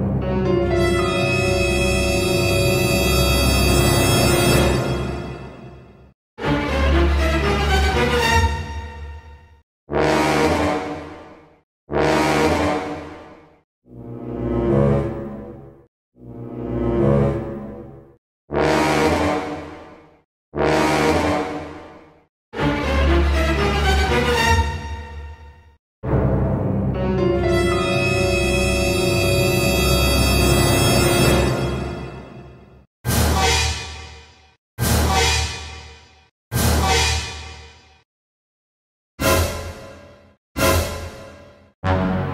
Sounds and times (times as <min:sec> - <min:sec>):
Scary music: 0:00.0 - 0:09.6, 0:22.6 - 0:38.0.